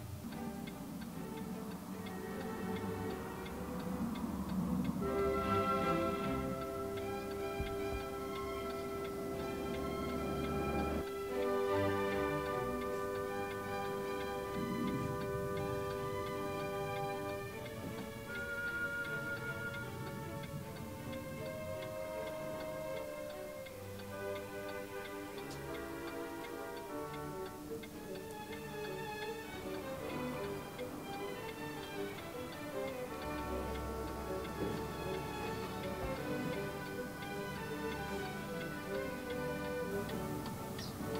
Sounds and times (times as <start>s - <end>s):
Music: 0.0s - 41.1s
Tick-tock: 0.0s - 41.1s
Tick: 12.4s - 41.1s.